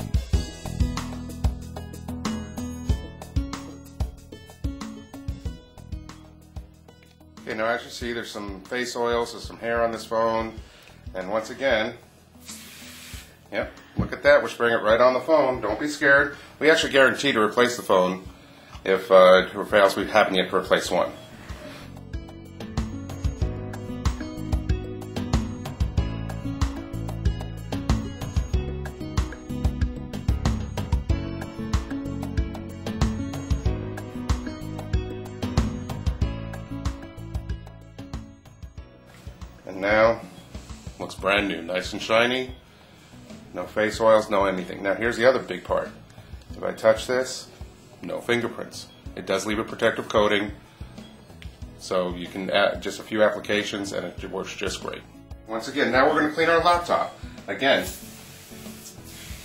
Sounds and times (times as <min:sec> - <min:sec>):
Music: 0:00.0 - 0:59.4
Speech: 0:07.4 - 0:12.0, 0:13.5 - 0:21.2, 0:39.6 - 0:40.3, 0:41.0 - 0:42.6, 0:43.5 - 0:46.0, 0:46.6 - 0:50.6, 0:51.8 - 0:58.0
Spray: 0:12.4 - 0:13.4, 0:57.7 - 0:59.4.